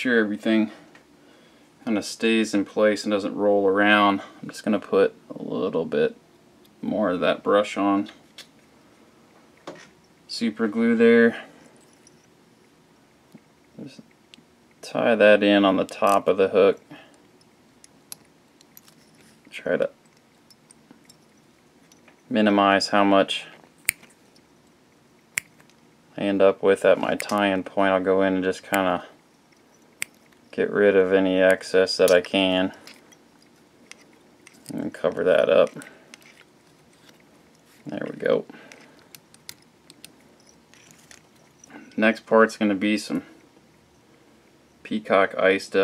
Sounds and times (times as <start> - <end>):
Speech: 0.0 - 0.8, 1.8 - 6.2, 6.8 - 8.1, 10.3 - 11.4, 14.8 - 16.8, 19.6 - 19.9, 22.3 - 23.6, 26.2 - 29.1, 30.6 - 32.8, 34.7 - 35.8, 37.9 - 38.5, 42.0 - 43.3, 44.9 - 45.8.